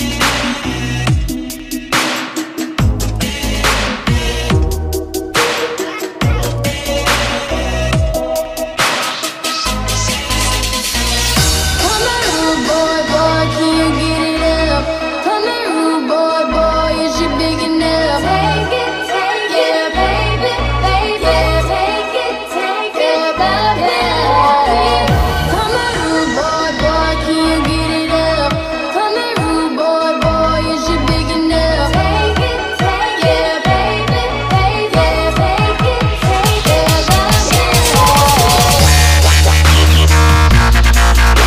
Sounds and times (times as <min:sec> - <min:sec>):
Sampler: 0:36.2 - 0:41.4.